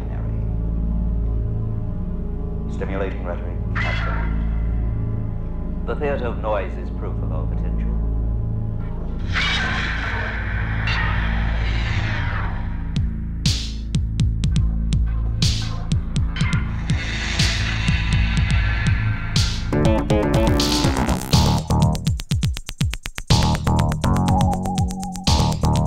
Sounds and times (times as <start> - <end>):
Music: 0.0 - 25.8.